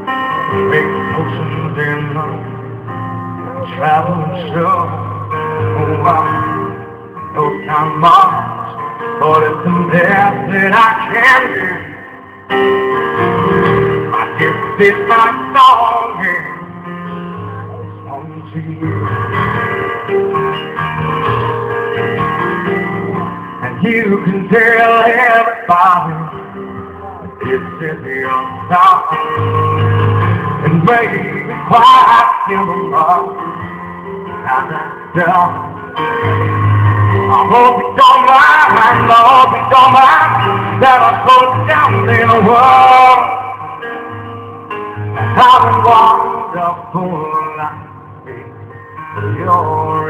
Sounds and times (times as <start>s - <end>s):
Music: 0.0s - 50.1s.